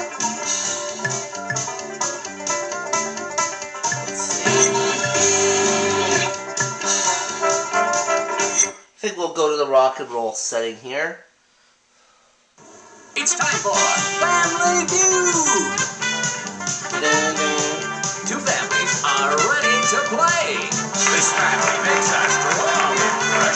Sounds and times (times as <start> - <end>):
Music: 0.0 - 8.8, 13.2 - 23.5
Speech: 9.0 - 11.3, 13.2 - 15.8, 17.0 - 21.4.